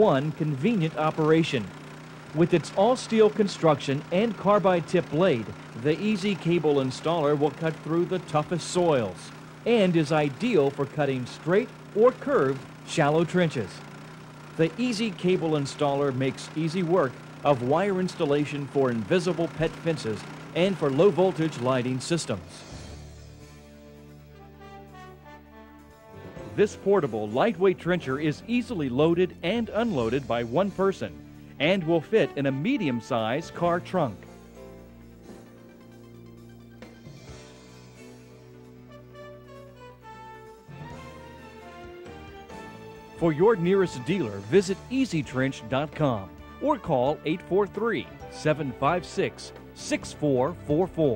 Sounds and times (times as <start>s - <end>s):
Power tool: 0.0s - 23.8s.